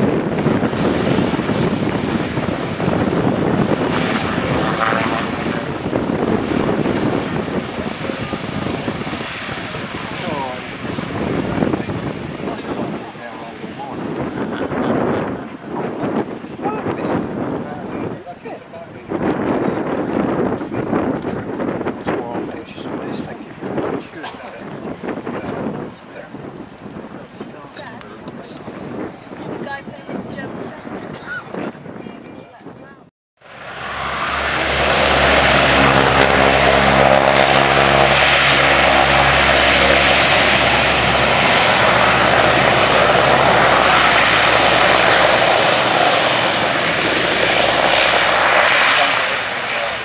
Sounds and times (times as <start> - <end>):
Fixed-wing aircraft, airplane: 0.0 - 32.4, 33.4 - 50.0
Outside, urban or manmade: 0.0 - 50.0.